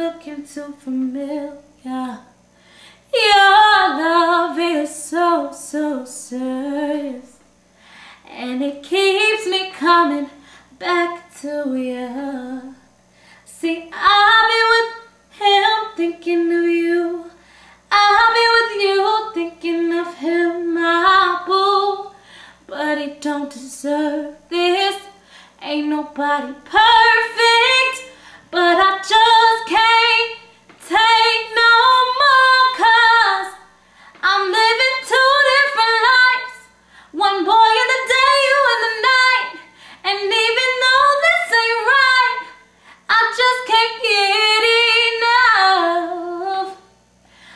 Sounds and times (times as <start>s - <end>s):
Female singing: 0.0s - 2.4s, 3.1s - 7.4s, 8.3s - 12.8s, 13.5s - 33.6s, 34.2s - 46.9s.